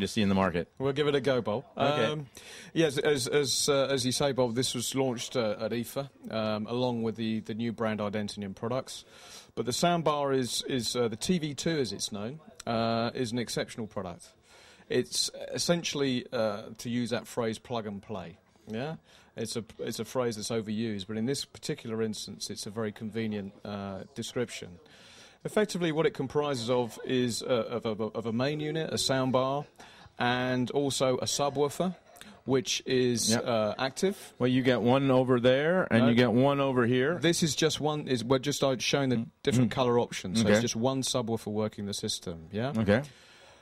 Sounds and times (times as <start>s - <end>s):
Speech: 0.0s - 9.0s, 9.6s - 43.1s.